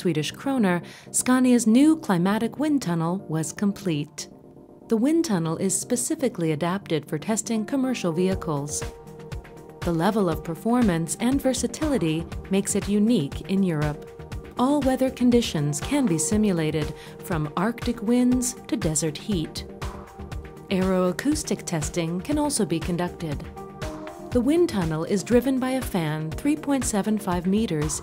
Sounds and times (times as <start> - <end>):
Speech: 0.0 - 4.3, 4.9 - 8.9, 9.8 - 14.0, 14.6 - 19.6, 20.7 - 23.5, 24.4 - 28.0
Music: 0.0 - 28.0.